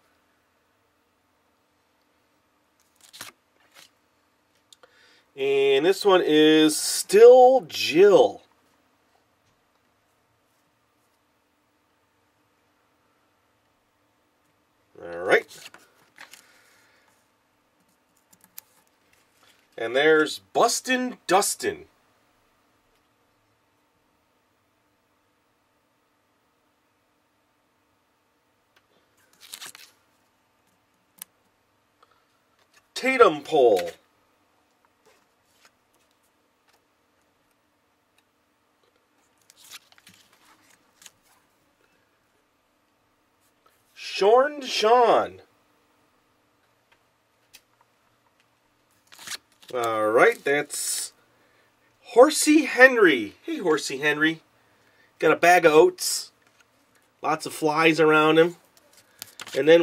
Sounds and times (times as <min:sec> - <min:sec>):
Inside, small room: 0:00.0 - 0:59.8.